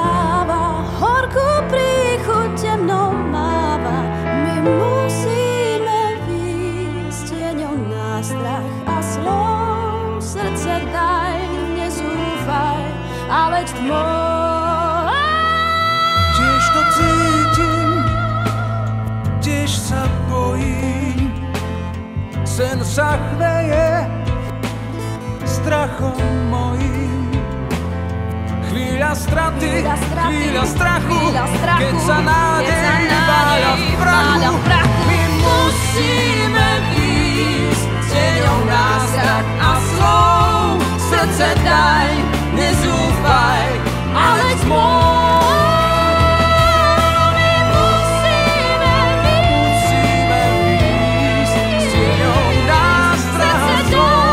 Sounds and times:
Blues: 0:00.0 - 0:54.3
Soul music: 0:00.0 - 0:54.3.

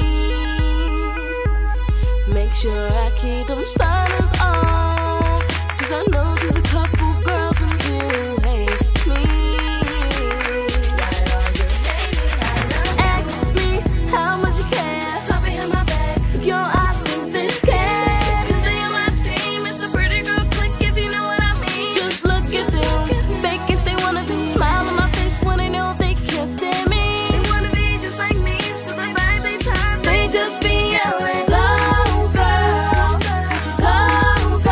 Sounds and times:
Independent music: 0:00.0 - 0:34.7
Pop music: 0:00.0 - 0:34.7
Soundtrack music: 0:00.0 - 0:34.7.

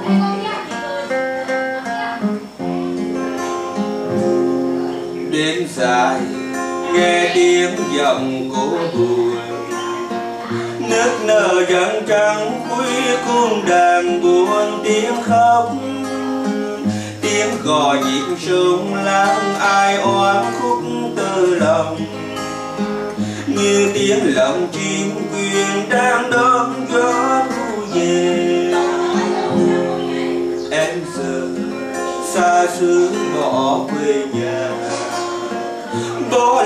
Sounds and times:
Electric guitar: 0:00.0 - 0:36.6.

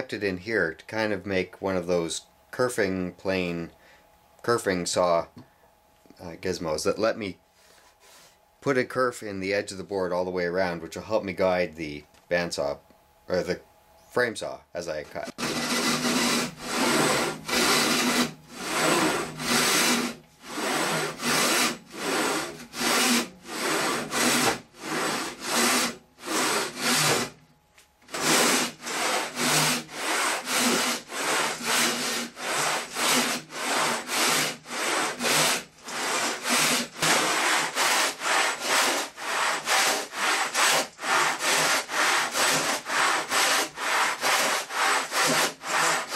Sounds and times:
Sawing: 0:15.2 - 0:27.4, 0:28.0 - 0:46.1
Wood: 0:15.3 - 0:27.4, 0:28.1 - 0:46.1.

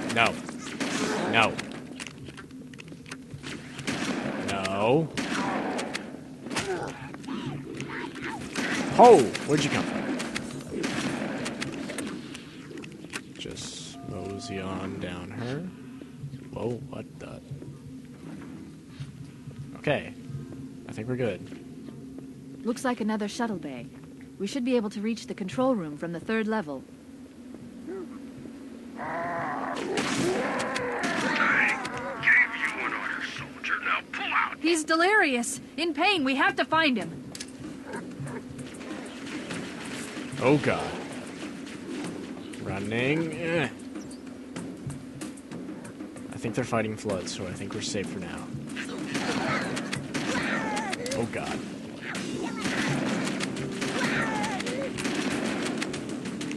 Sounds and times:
Fusillade: 0:08.5 - 0:12.2, 0:48.8 - 0:56.5.

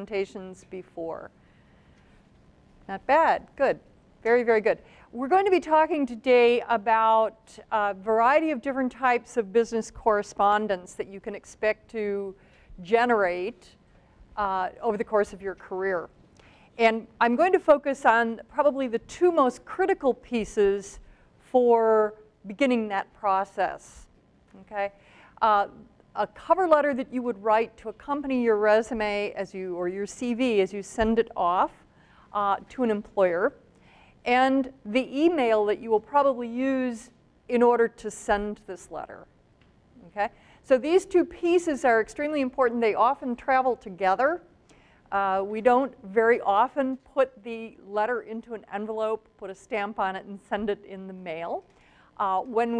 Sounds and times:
Speech: 0:00.0 - 0:01.3, 0:02.9 - 0:13.8, 0:14.4 - 0:16.1, 0:16.8 - 0:31.8, 0:32.4 - 0:33.6, 0:34.3 - 0:39.3, 0:40.0 - 0:44.4, 0:45.2 - 0:51.6, 0:52.2 - 0:52.7.

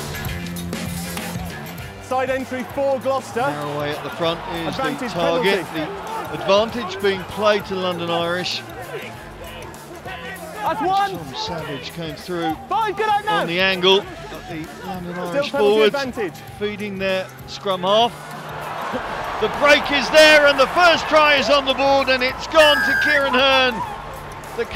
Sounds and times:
Music: 0:00.0 - 0:24.7
Speech: 0:02.1 - 0:09.2, 0:10.0 - 0:18.1, 0:19.4 - 0:23.8.

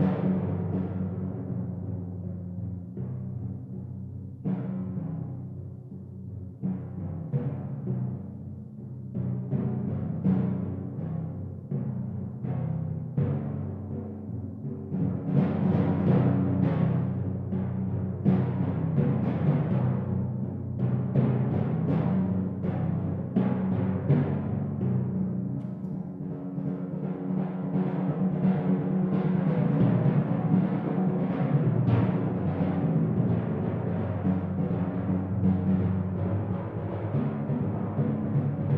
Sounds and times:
Timpani: 0:00.0 - 0:38.7.

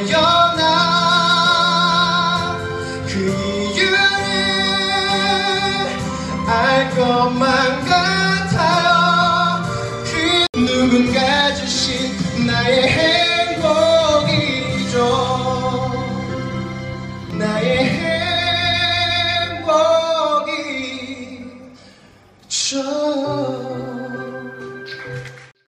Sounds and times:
Male singing: 0:00.0 - 0:16.3, 0:17.3 - 0:21.8, 0:22.5 - 0:24.6
Music: 0:00.0 - 0:25.6.

